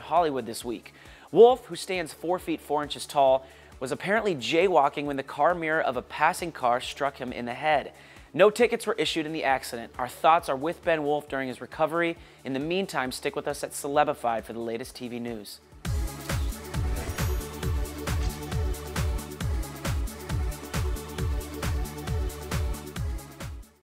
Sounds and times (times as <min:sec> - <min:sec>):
Speech: 0:00.0 - 0:15.6
Music: 0:00.0 - 0:23.8.